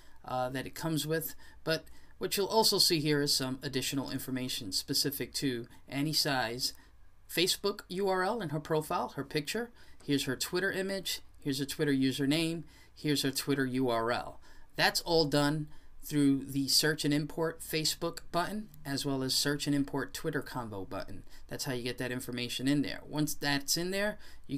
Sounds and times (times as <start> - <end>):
Speech: 0.2 - 24.5.